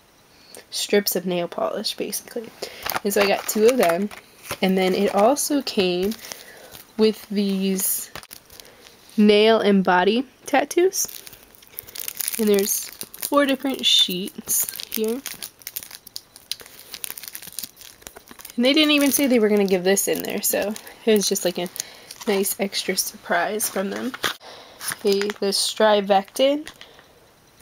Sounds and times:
Inside, small room: 0.0s - 27.6s
Speech: 0.7s - 6.2s, 7.0s - 8.1s, 9.2s - 11.1s, 12.4s - 15.2s, 18.6s - 21.7s, 22.3s - 24.2s, 25.0s - 26.7s
Crumpling, crinkling: 2.6s - 9.1s, 11.0s - 26.9s.

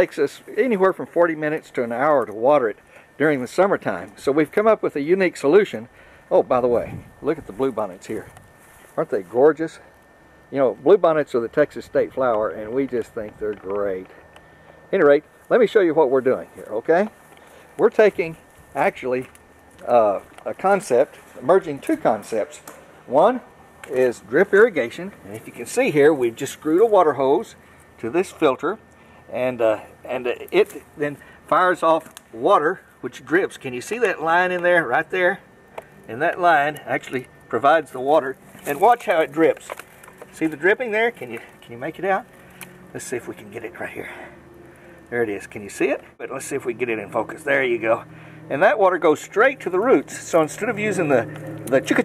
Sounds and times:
Speech: 0.0s - 8.3s, 9.0s - 9.9s, 10.5s - 14.2s, 14.9s - 17.2s, 17.8s - 35.4s, 36.1s - 42.3s, 42.9s - 44.3s, 45.1s - 52.0s.

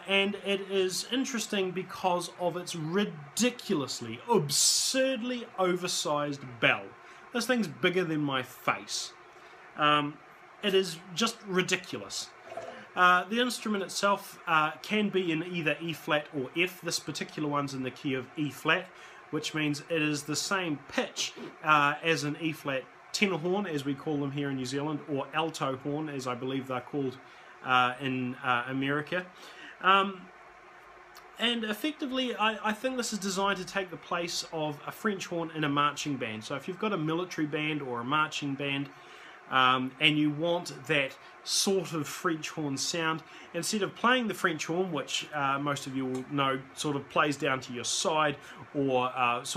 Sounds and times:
Speech: 0.0s - 9.2s, 9.8s - 30.3s, 31.2s - 49.5s.

